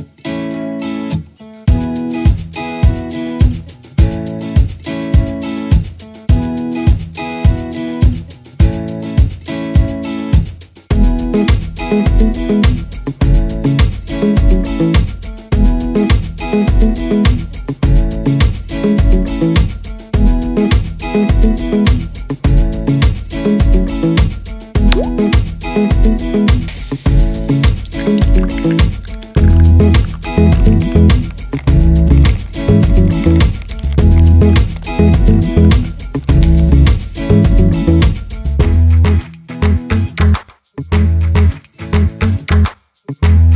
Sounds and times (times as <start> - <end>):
Music: 0.0 - 43.5.